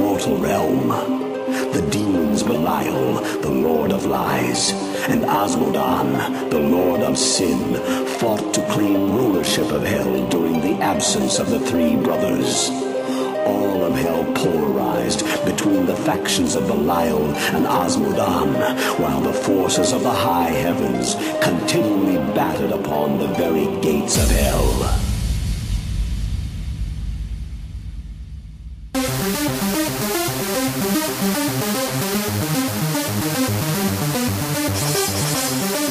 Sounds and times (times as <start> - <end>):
Speech: 0.0 - 25.1
Music: 0.0 - 35.9.